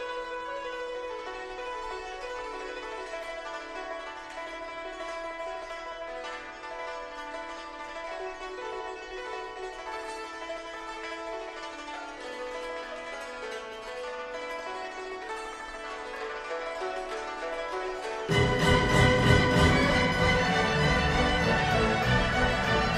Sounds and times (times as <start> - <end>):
Music: 0.0 - 22.9.